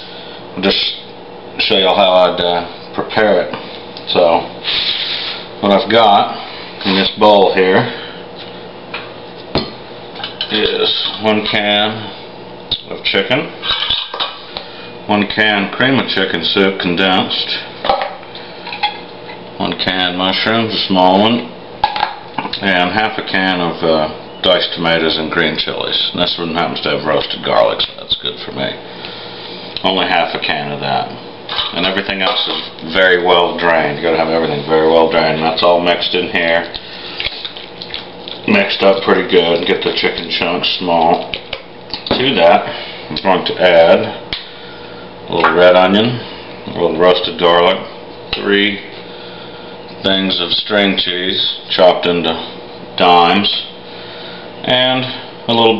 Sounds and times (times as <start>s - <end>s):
Speech: 0.6s - 4.5s, 5.6s - 8.0s, 10.4s - 13.6s, 15.1s - 17.7s, 19.6s - 21.6s, 22.4s - 28.8s, 29.8s - 36.8s, 38.4s - 41.4s, 42.1s - 44.2s, 45.3s - 49.0s, 50.0s - 53.8s, 54.6s - 55.7s.